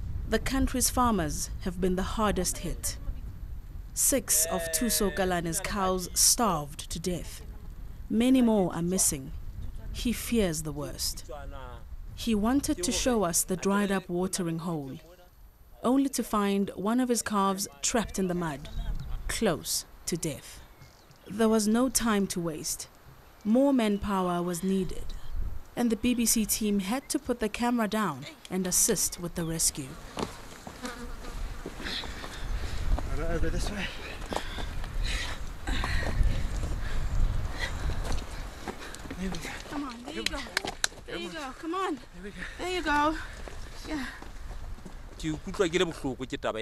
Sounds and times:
Fly, housefly: 28.7 - 32.8
Bee, wasp, etc.: 29.8 - 33.5.

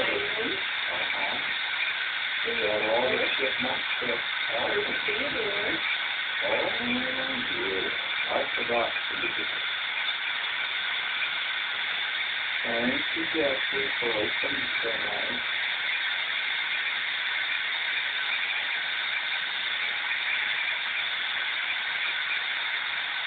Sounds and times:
Speech: 0.0 - 1.5, 2.5 - 5.8, 6.4 - 9.6, 12.7 - 15.4.

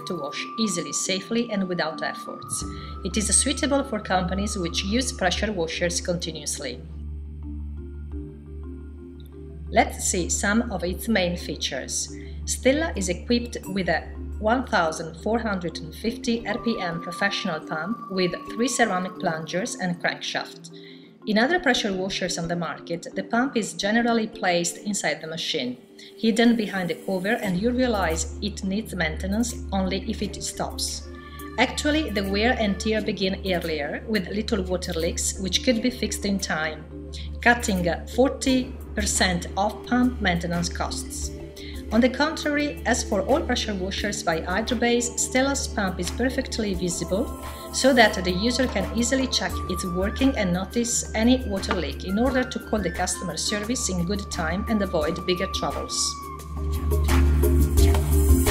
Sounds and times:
Speech: 0.0 - 6.9, 9.8 - 20.7, 21.3 - 41.3, 41.9 - 56.2
Music: 0.0 - 58.5.

